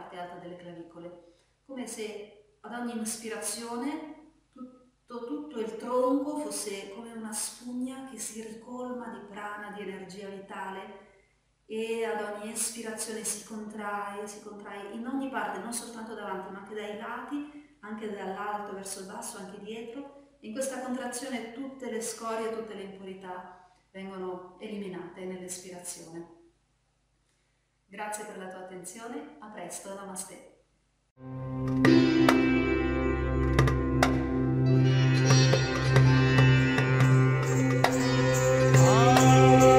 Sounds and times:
Speech: 0:00.0 - 0:01.1, 0:01.7 - 0:04.1, 0:05.1 - 0:11.0, 0:11.7 - 0:26.3, 0:28.0 - 0:30.5
Music: 0:31.2 - 0:39.7.

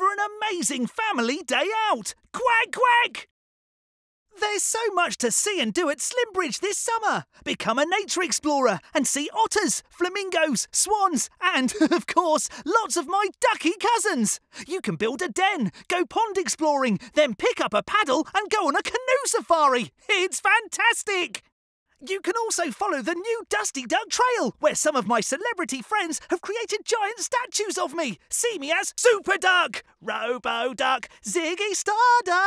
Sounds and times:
Speech: 0:00.0 - 0:03.3, 0:04.4 - 0:32.4.

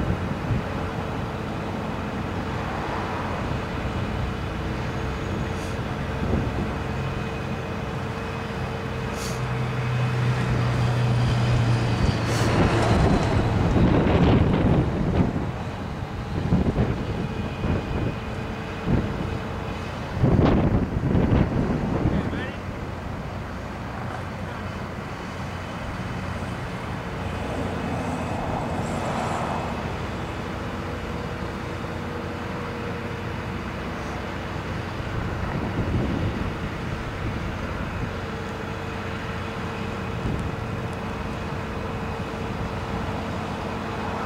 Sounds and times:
Speech: 0:22.1 - 0:22.6.

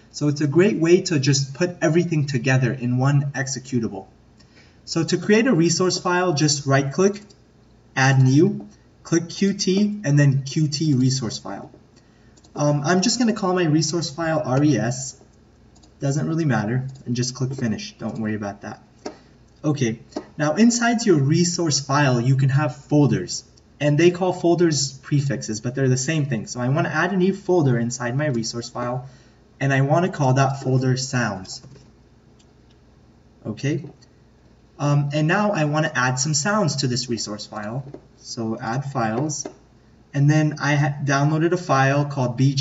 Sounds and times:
Speech: 0:00.1 - 0:04.2, 0:04.9 - 0:07.3, 0:08.0 - 0:11.8, 0:12.6 - 0:15.2, 0:16.0 - 0:18.9, 0:19.6 - 0:31.8, 0:33.4 - 0:34.0, 0:34.8 - 0:42.6.

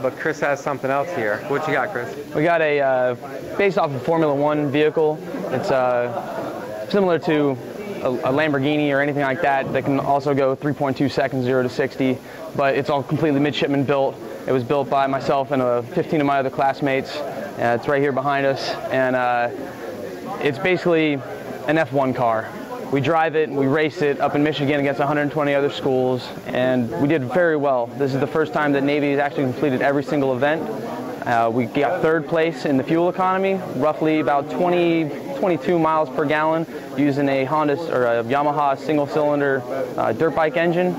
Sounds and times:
Speech: 0:00.0 - 0:40.9.

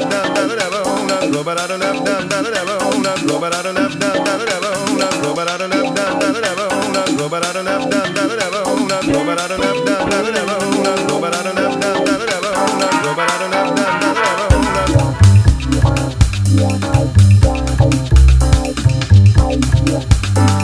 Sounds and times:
Funny music: 0:00.0 - 0:20.6.

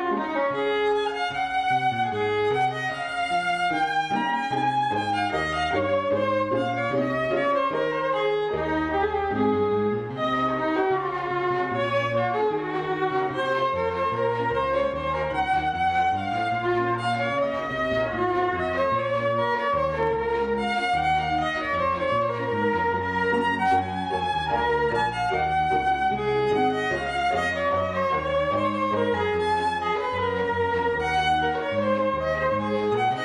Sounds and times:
Violin, fiddle: 0:00.0 - 0:33.2.

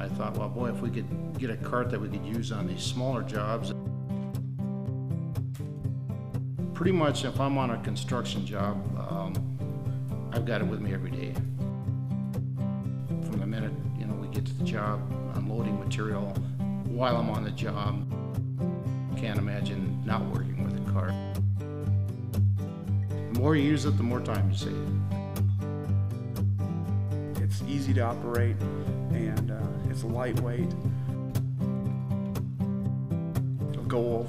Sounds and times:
Speech: 0:00.0 - 0:03.8, 0:06.8 - 0:09.4, 0:10.3 - 0:11.5, 0:13.3 - 0:18.0, 0:19.2 - 0:21.2, 0:23.3 - 0:25.0, 0:27.4 - 0:30.8, 0:33.8 - 0:34.2
Music: 0:00.0 - 0:34.2.

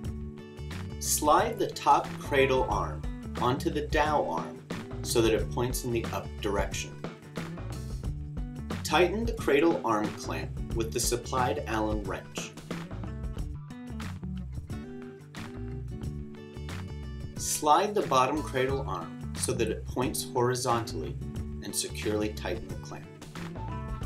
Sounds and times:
Music: 0:00.0 - 0:24.0
Speech: 0:01.0 - 0:07.0, 0:08.8 - 0:12.6, 0:17.4 - 0:23.1.

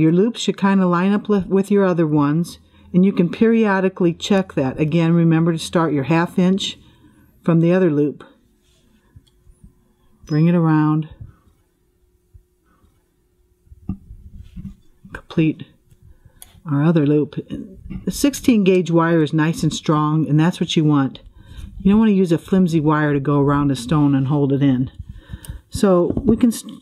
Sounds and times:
Speech: 0:00.0 - 0:06.8, 0:07.4 - 0:08.4, 0:10.3 - 0:11.3, 0:15.1 - 0:15.8, 0:16.6 - 0:21.2, 0:21.8 - 0:25.0, 0:25.7 - 0:26.8
Inside, small room: 0:00.0 - 0:26.8.

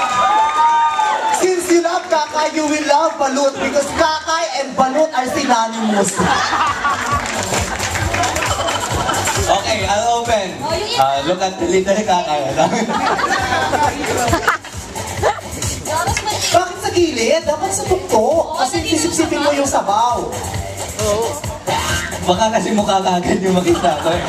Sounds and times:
Inside, large room or hall: 0:00.0 - 0:24.2
Music: 0:00.0 - 0:24.2.

